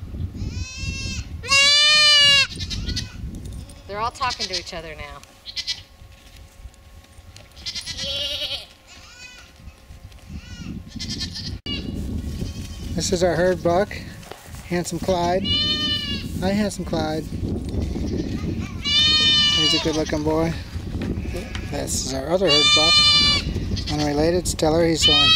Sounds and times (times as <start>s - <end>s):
Livestock, farm animals, working animals: 0.4s - 25.3s.